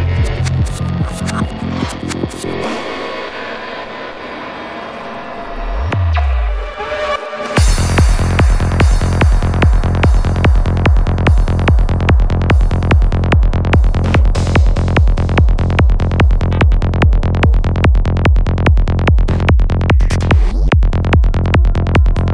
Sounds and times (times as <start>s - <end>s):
Music: 0.0s - 22.3s.